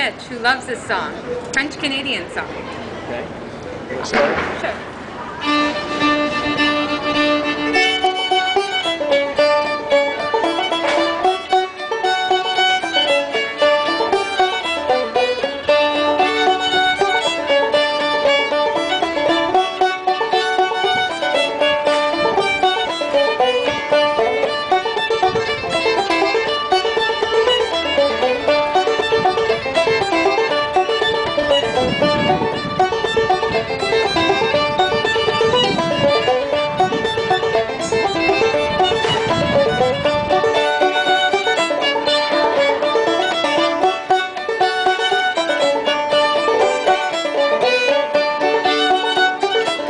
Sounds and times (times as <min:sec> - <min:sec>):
Pizzicato: 0:05.3 - 0:49.8.